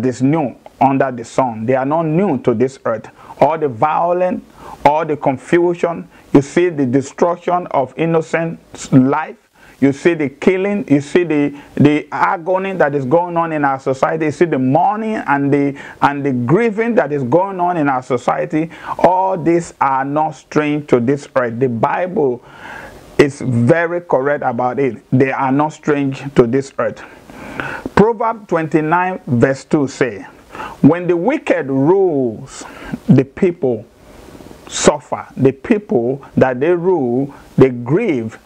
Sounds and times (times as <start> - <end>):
Speech: 0.0 - 22.5, 23.2 - 27.2, 27.9 - 33.9, 34.7 - 38.4.